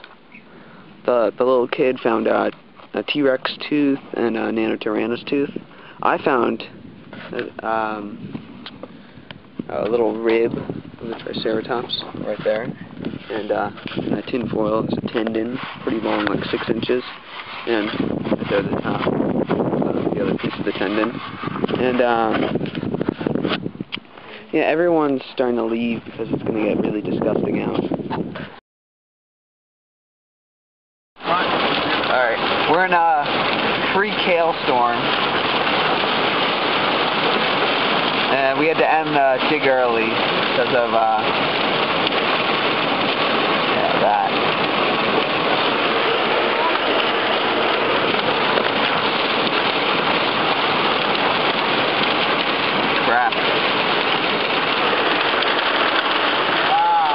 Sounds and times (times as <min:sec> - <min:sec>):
Speech: 0:01.1 - 0:08.2, 0:09.7 - 0:12.7, 0:13.3 - 0:17.1, 0:17.7 - 0:19.1, 0:20.2 - 0:21.2, 0:21.8 - 0:22.4, 0:24.4 - 0:27.9, 0:31.2 - 0:31.5, 0:32.1 - 0:33.3, 0:33.9 - 0:35.1, 0:38.3 - 0:41.3, 0:43.7 - 0:44.4, 0:46.4 - 0:46.9, 0:53.0 - 0:53.4.